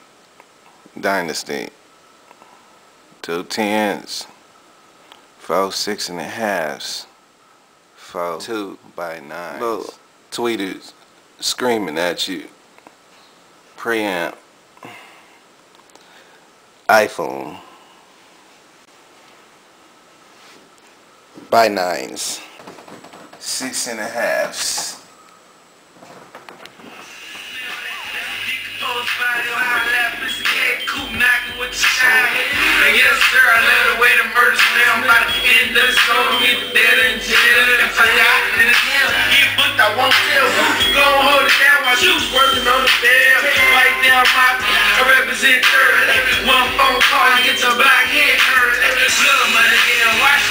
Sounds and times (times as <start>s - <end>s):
Music: 27.1s - 50.5s.